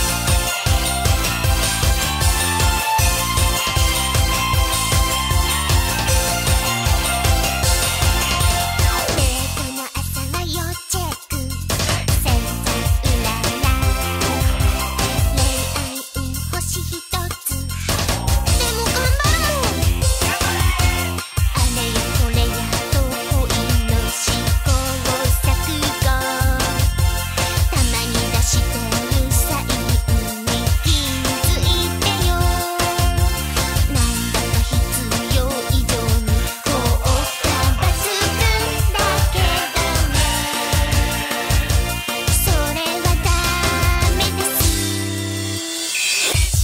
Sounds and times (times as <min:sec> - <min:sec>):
Music: 0:00.0 - 0:46.6.